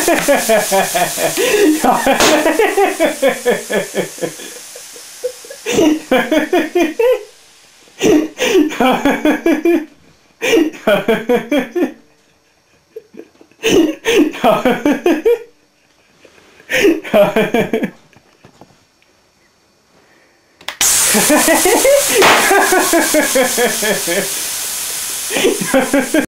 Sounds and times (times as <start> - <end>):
Bang: 22.2 - 22.6.